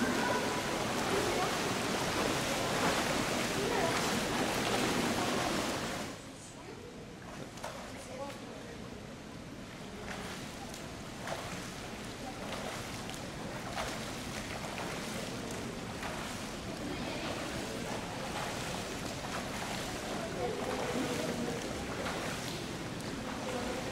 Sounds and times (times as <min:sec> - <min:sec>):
Speech: 0:00.0 - 0:09.1, 0:11.9 - 0:13.8, 0:16.6 - 0:23.9.